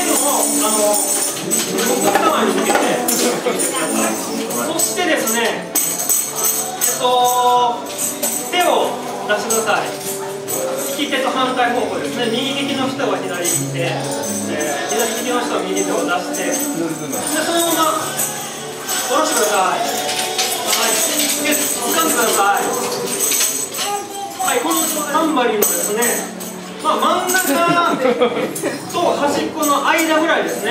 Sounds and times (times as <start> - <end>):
Tambourine: 0.0 - 28.0.